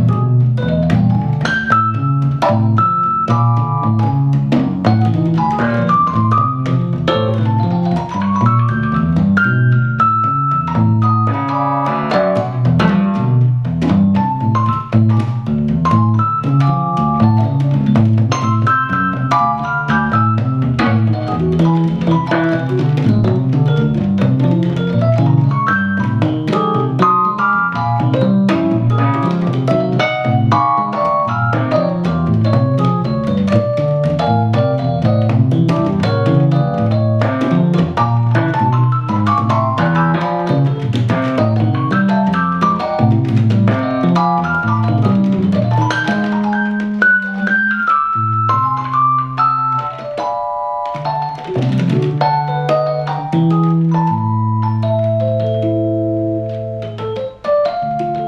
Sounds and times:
Electric piano: 0.0 - 58.2.

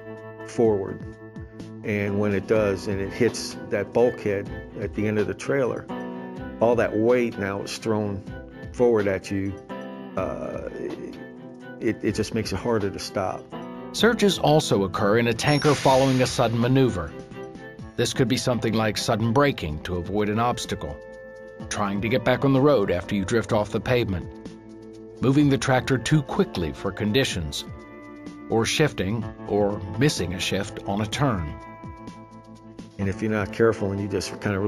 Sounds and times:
Music: 0.0 - 34.6
Speech: 0.5 - 1.0, 1.8 - 5.9, 6.6 - 8.2, 8.8 - 9.6, 10.2 - 11.2, 11.8 - 13.4, 14.0 - 17.2, 18.0 - 21.0, 21.7 - 24.3, 25.2 - 27.7, 28.5 - 31.6, 33.0 - 34.6.

